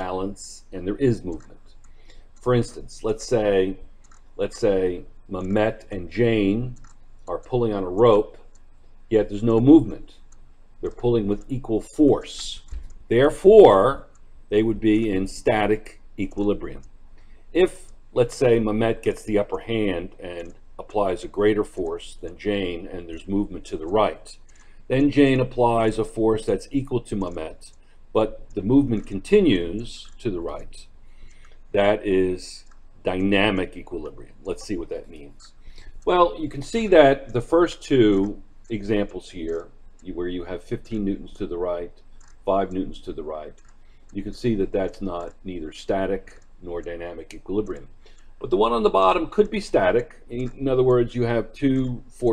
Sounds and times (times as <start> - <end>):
Speech: 0.0 - 1.6, 2.4 - 3.8, 4.4 - 8.5, 9.1 - 10.2, 10.8 - 16.9, 17.6 - 30.9, 31.8 - 43.6, 44.2 - 52.3.